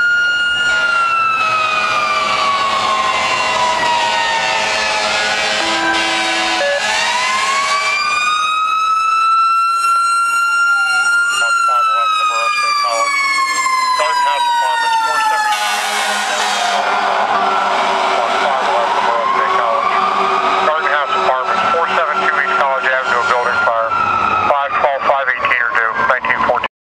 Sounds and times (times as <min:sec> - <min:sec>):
Vehicle: 0:00.0 - 0:26.7
Speech: 0:10.7 - 0:13.1, 0:14.0 - 0:15.5, 0:18.2 - 0:20.0, 0:20.7 - 0:23.9, 0:24.5 - 0:26.7.